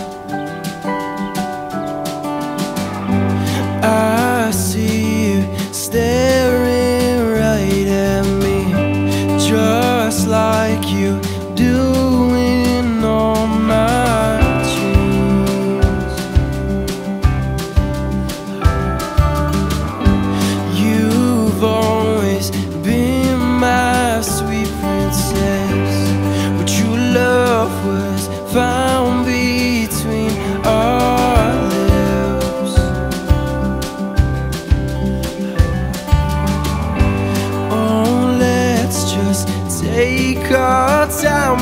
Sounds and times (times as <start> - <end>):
Rhythm and blues: 0.0 - 41.6
Soul music: 0.0 - 41.6.